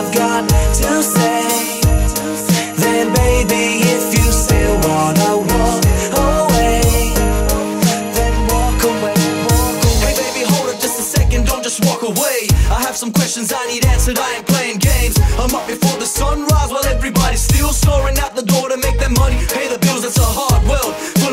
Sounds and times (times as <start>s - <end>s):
Music: 0.0s - 21.3s.